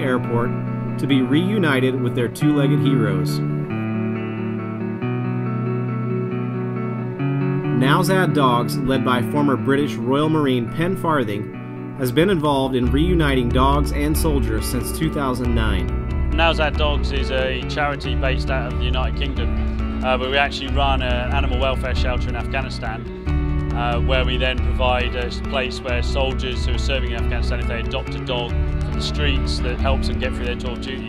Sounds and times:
Speech: 0:00.0 - 0:03.4, 0:07.8 - 0:23.0, 0:23.8 - 0:31.0
Music: 0:00.0 - 0:31.0.

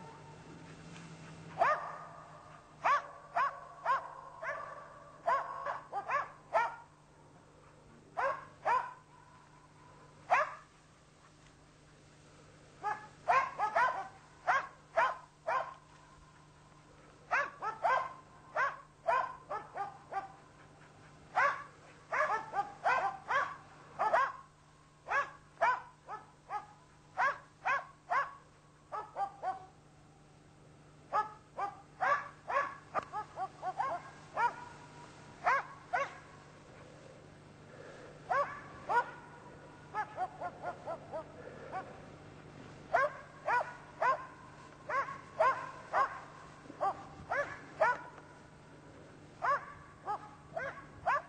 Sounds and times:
Bow-wow: 0:01.5 - 0:06.9, 0:08.2 - 0:09.0, 0:12.8 - 0:15.8, 0:17.3 - 0:20.4, 0:21.4 - 0:24.4, 0:25.1 - 0:28.4, 0:31.2 - 0:34.8, 0:35.4 - 0:36.3, 0:38.3 - 0:41.9, 0:43.0 - 0:48.2, 0:49.4 - 0:51.2.

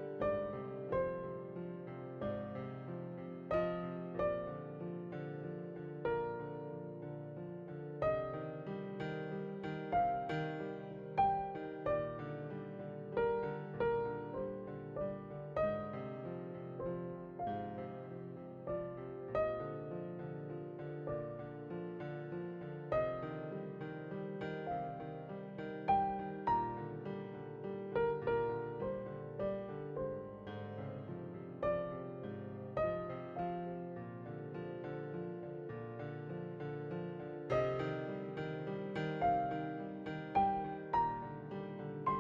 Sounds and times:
Piano: 0:00.0 - 0:42.2.

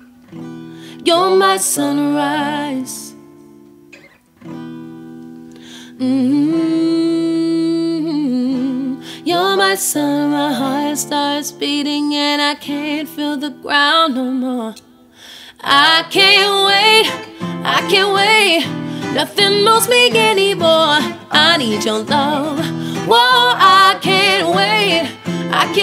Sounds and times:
Music: 0:00.0 - 0:14.1, 0:14.8 - 0:25.8
Singing: 0:15.6 - 0:25.8.

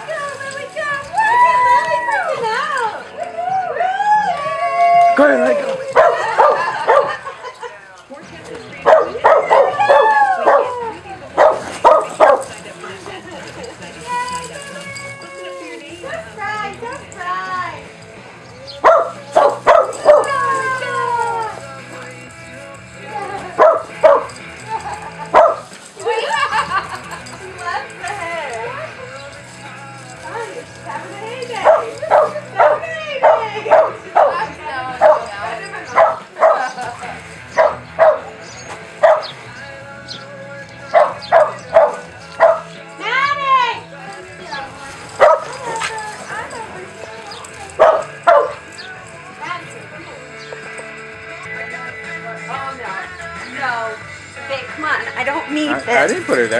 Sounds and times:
Music: 0:00.0 - 0:56.5
Dog: 0:05.9 - 0:07.2, 0:08.9 - 0:10.8, 0:11.4 - 0:12.5, 0:18.8 - 0:20.4, 0:23.6 - 0:24.3, 0:25.3 - 0:25.7, 0:31.6 - 0:35.3, 0:35.9 - 0:36.8, 0:37.5 - 0:38.4, 0:39.0 - 0:39.3, 0:40.9 - 0:42.7, 0:45.2 - 0:46.0, 0:47.7 - 0:48.7.

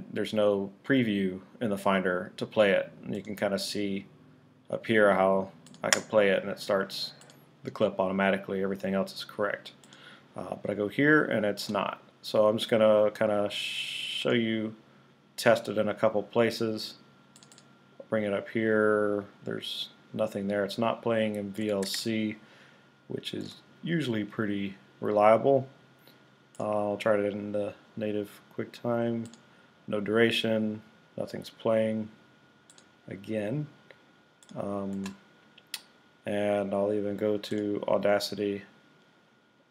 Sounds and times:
Speech: 0:00.0 - 0:09.8, 0:10.4 - 0:14.8, 0:15.4 - 0:17.0, 0:18.0 - 0:22.4, 0:23.1 - 0:25.8, 0:26.6 - 0:29.3, 0:29.9 - 0:32.2, 0:33.1 - 0:33.8, 0:34.5 - 0:35.2, 0:36.2 - 0:38.8.

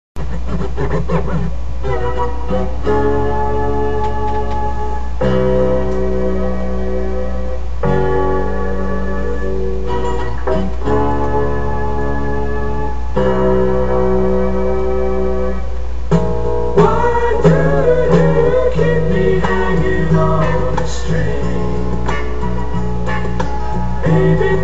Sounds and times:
Inside, small room: 0:00.0 - 0:24.6
Music: 0:00.0 - 0:24.6.

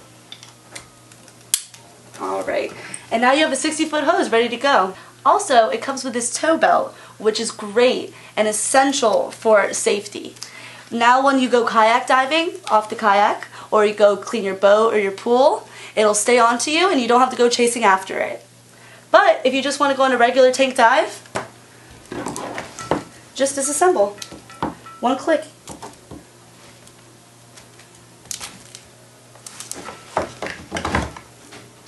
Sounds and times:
Speech: 0:02.2 - 0:10.4, 0:11.0 - 0:18.5, 0:19.2 - 0:21.2, 0:23.4 - 0:24.2.

